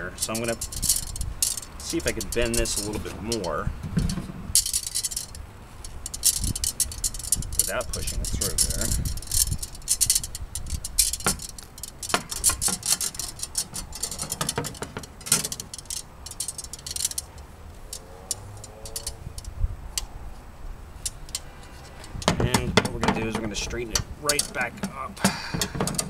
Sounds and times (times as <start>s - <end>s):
Speech: 0.0s - 0.6s, 1.8s - 3.7s, 7.6s - 9.0s, 22.4s - 25.3s.